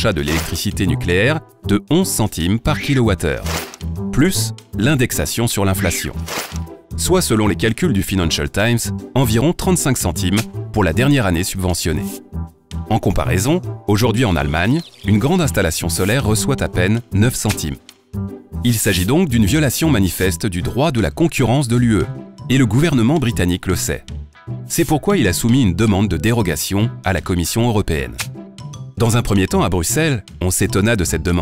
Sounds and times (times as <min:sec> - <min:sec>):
Speech: 0:00.0 - 0:06.2, 0:07.0 - 0:12.2, 0:12.9 - 0:17.8, 0:18.6 - 0:24.1, 0:24.7 - 0:28.3, 0:29.0 - 0:31.4
Music: 0:00.0 - 0:31.4.